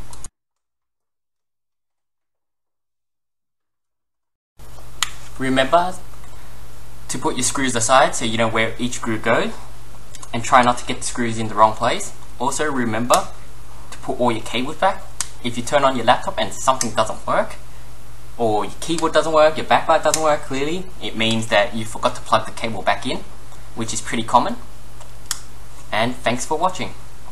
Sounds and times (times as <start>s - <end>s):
Speech: 5.4s - 6.1s, 7.1s - 13.4s, 14.0s - 17.6s, 18.4s - 24.7s, 25.9s - 27.3s.